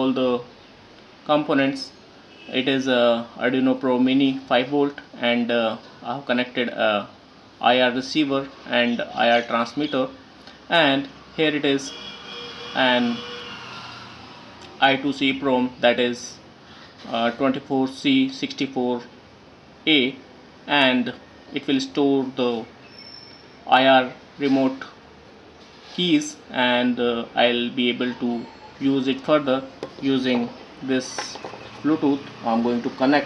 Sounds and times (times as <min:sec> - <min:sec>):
Speech: 0:00.0 - 0:00.5, 0:01.3 - 0:12.0, 0:12.8 - 0:13.2, 0:14.8 - 0:16.4, 0:17.0 - 0:19.1, 0:19.9 - 0:22.7, 0:23.7 - 0:25.0, 0:26.0 - 0:33.2.